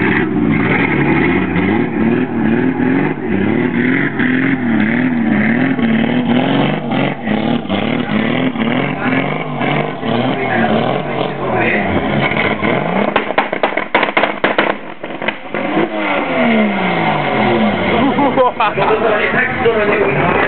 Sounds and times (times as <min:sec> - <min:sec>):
Accelerating, revving, vroom: 0:00.0 - 0:18.5
Car: 0:00.0 - 0:20.4
Medium engine (mid frequency): 0:00.0 - 0:20.4
Speech: 0:08.0 - 0:12.0, 0:18.6 - 0:20.4.